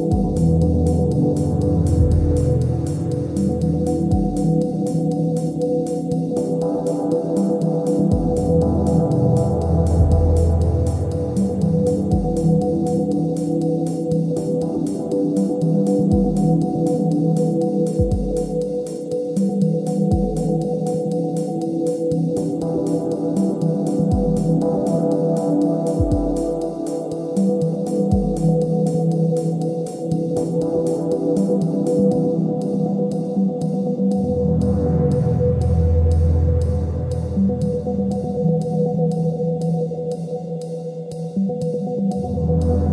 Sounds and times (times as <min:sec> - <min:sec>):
Ambient music: 0:00.0 - 0:42.9.